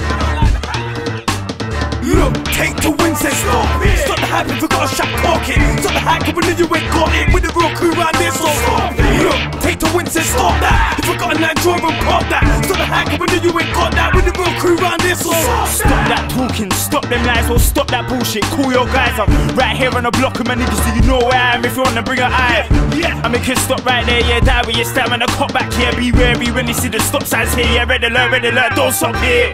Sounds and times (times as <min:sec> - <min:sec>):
Funk: 0:00.0 - 0:27.8.